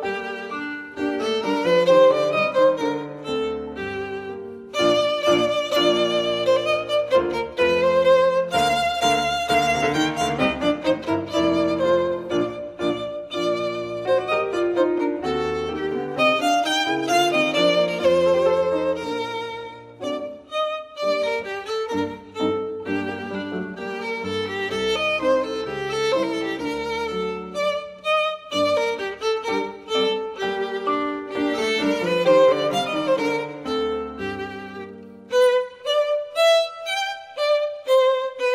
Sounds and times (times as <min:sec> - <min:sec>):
Violin, fiddle: 0:00.0 - 0:38.5.